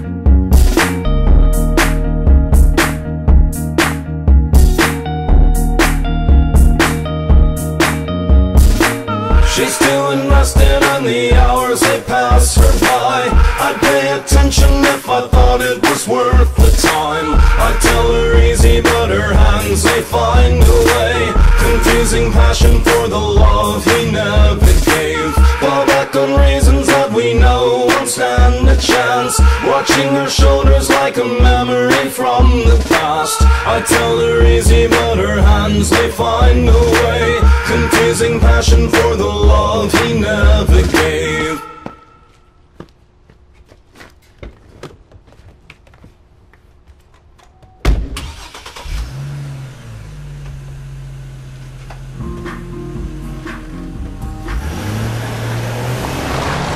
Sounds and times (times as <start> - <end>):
Music: 0.0 - 42.1, 52.2 - 55.7.